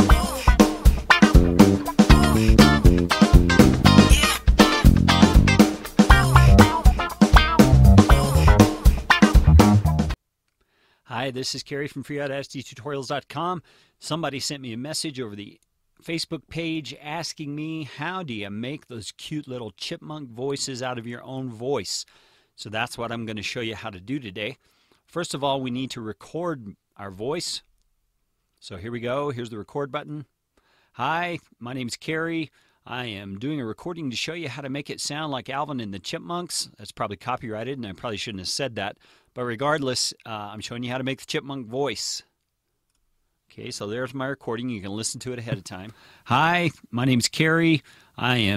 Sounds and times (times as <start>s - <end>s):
Speech: 11.1s - 27.7s, 28.6s - 30.3s, 31.0s - 42.3s, 43.5s - 48.5s.